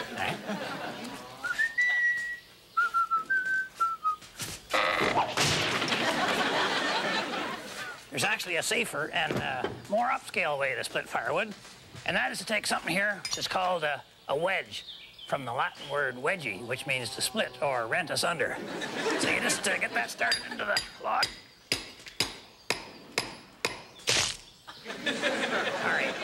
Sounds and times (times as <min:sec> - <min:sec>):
Whistling: 0:01.4 - 0:04.3.